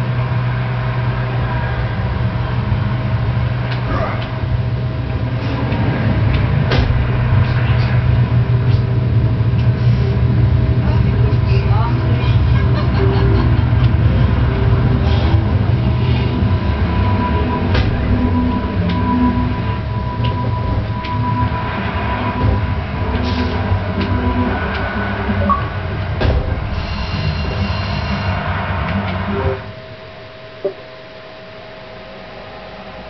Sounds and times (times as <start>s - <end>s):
Outside, urban or manmade: 0.0s - 33.1s
Speech: 10.8s - 13.0s.